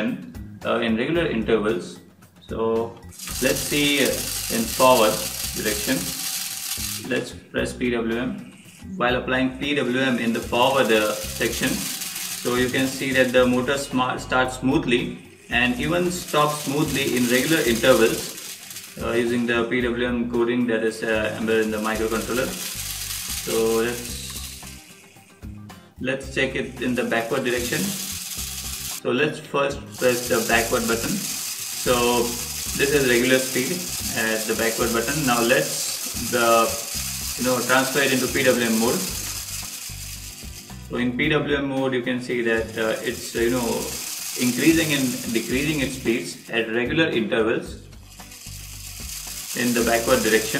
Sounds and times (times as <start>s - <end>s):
Speech: 0.0s - 6.2s, 7.0s - 18.4s, 19.0s - 22.6s, 23.5s - 24.4s, 26.0s - 28.0s, 29.0s - 39.2s, 40.9s - 47.8s, 49.6s - 50.6s.